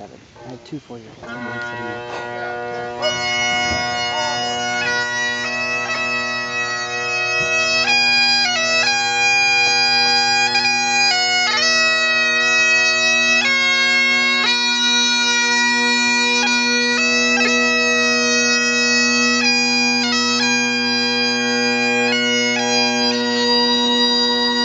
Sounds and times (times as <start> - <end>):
Bagpipes: 1.2 - 24.6.